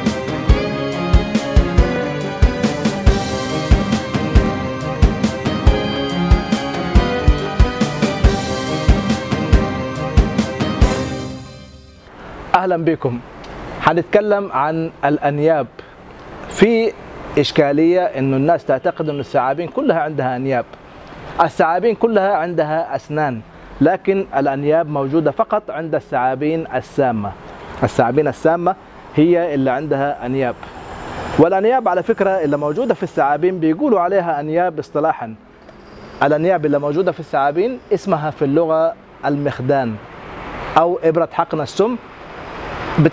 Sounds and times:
Outside, urban or manmade: 0.0 - 43.1
Speech: 12.5 - 15.8, 16.5 - 20.7, 21.4 - 30.6, 31.4 - 35.4, 36.2 - 40.0, 40.8 - 42.0.

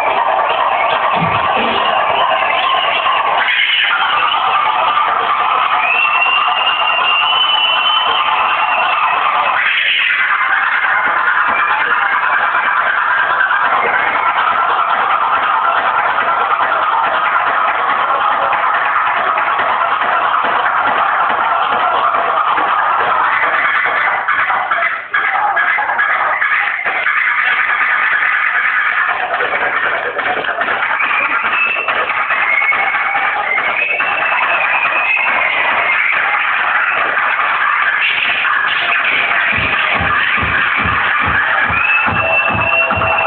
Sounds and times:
Scratching (performance technique): 0.0 - 43.2.

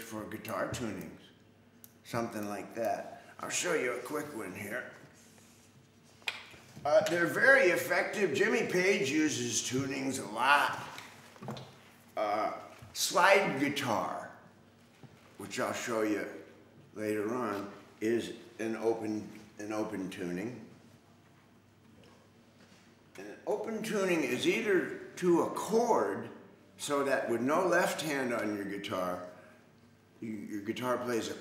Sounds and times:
Speech: 0.0 - 1.4, 2.0 - 5.0, 6.8 - 11.0, 12.2 - 14.4, 15.4 - 20.7, 23.2 - 29.4, 30.2 - 31.4.

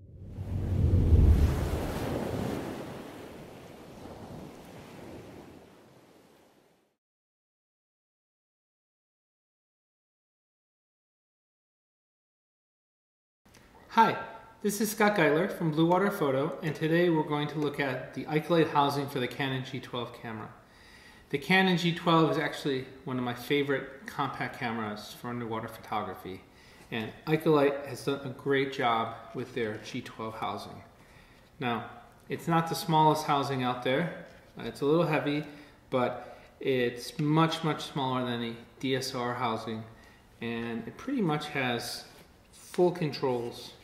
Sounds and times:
Speech: 13.9 - 20.6, 21.3 - 30.9, 31.6 - 43.8.

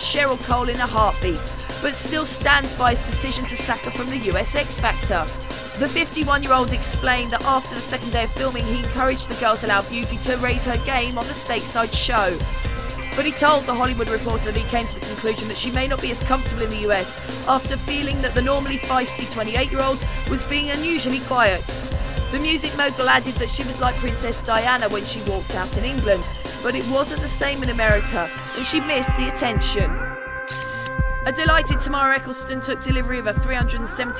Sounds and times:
Speech: 0.0 - 12.4, 13.2 - 30.0, 31.3 - 34.1
Music: 0.0 - 34.1.

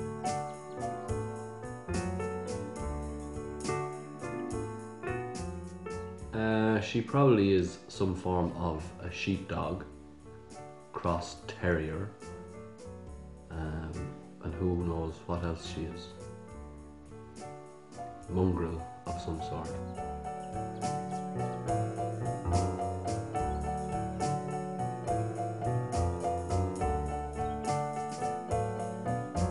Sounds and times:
Music: 0.0 - 29.5
Speech: 6.4 - 9.9, 11.0 - 12.2, 13.5 - 16.2, 18.3 - 19.8.

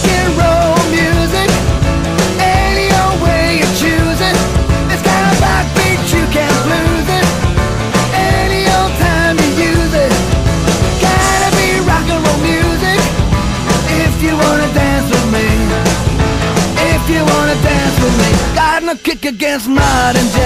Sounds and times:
Dance music: 0.0 - 20.4
Rock and roll: 0.0 - 20.4.

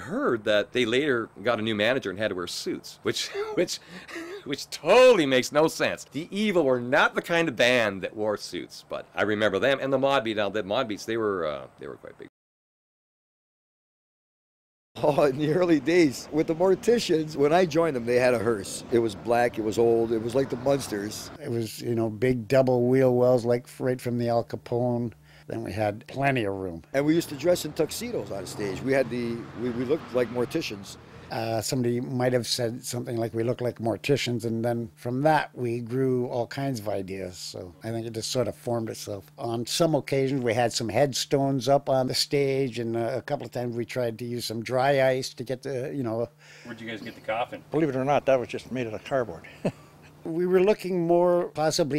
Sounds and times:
Speech: 0.0 - 12.3, 15.0 - 49.5, 50.2 - 51.9.

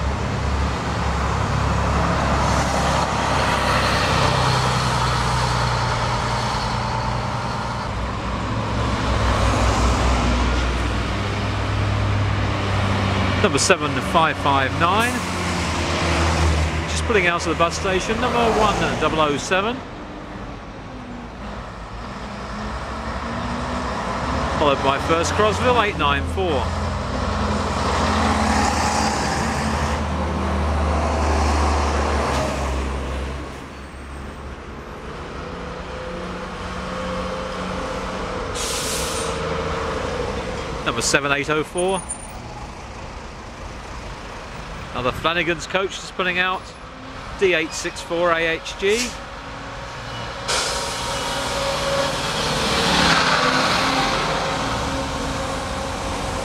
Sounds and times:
Bus: 0.0 - 56.4.

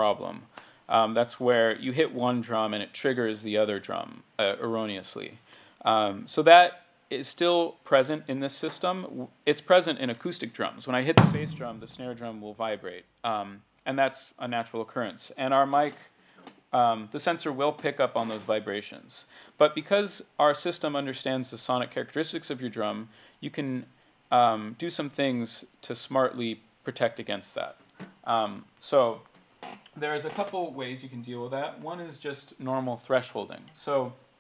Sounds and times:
Speech: 0.0 - 16.1, 16.8 - 29.3, 30.0 - 34.2.

